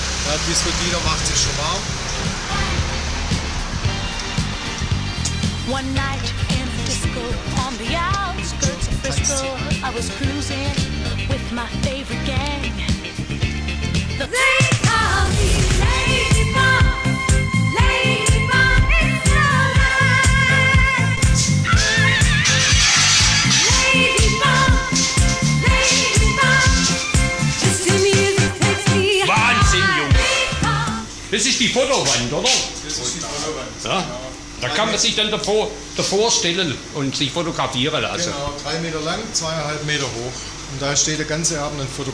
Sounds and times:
Disco: 14.0 - 31.1.

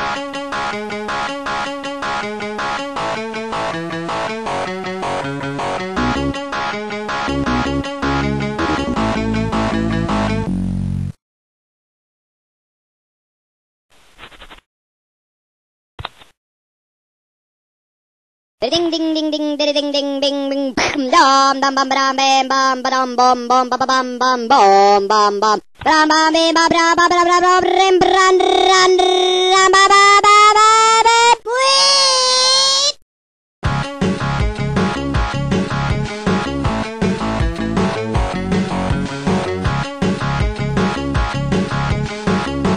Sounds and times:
Music: 0.0 - 11.2, 33.6 - 42.7.

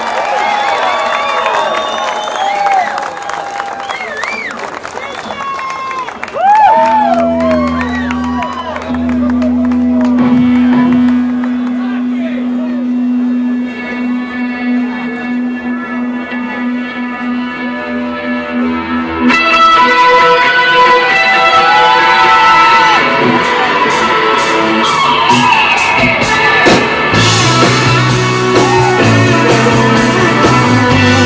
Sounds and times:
Music: 6.4 - 31.2.

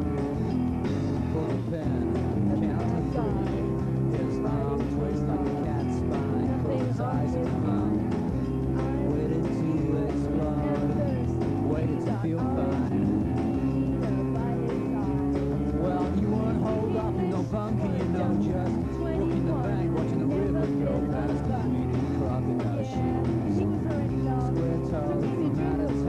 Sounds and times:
Music: 0.0 - 26.0
Speech: 1.3 - 8.1, 8.7 - 13.2, 13.8 - 26.0.

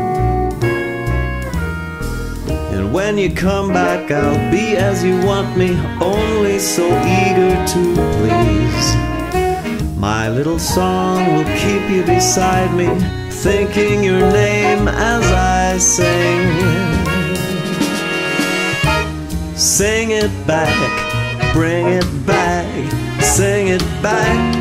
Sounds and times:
Christmas music: 0.0 - 24.6
Drum kit: 0.0 - 24.6
Pop music: 0.0 - 24.6
Drum: 16.5 - 20.6, 21.4 - 24.1.

